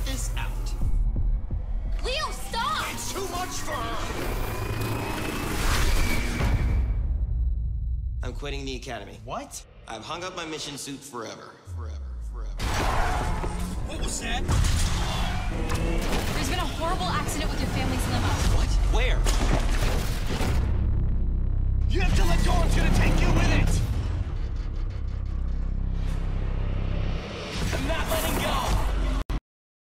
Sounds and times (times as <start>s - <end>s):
Music: 0.0s - 29.3s.